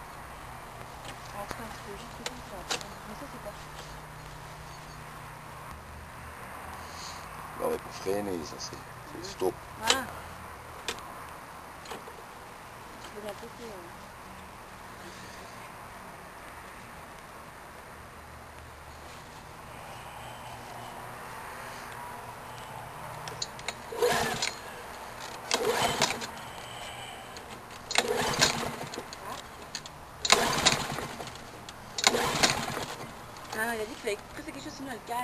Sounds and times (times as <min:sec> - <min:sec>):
Lawn mower: 0:23.3 - 0:33.6
Speech: 0:33.6 - 0:35.2.